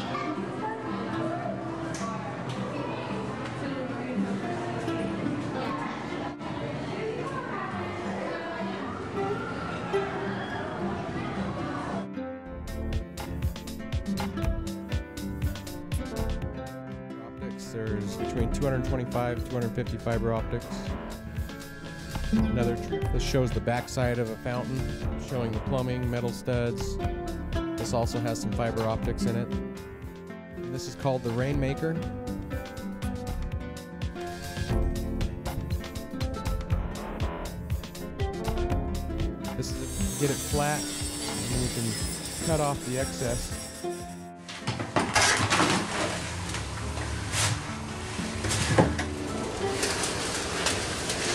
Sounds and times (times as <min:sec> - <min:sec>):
Music: 0:00.0 - 0:51.3
Speech: 0:17.4 - 0:20.9, 0:22.4 - 0:27.0, 0:27.8 - 0:29.6, 0:30.7 - 0:32.0, 0:39.6 - 0:40.9, 0:41.5 - 0:43.6.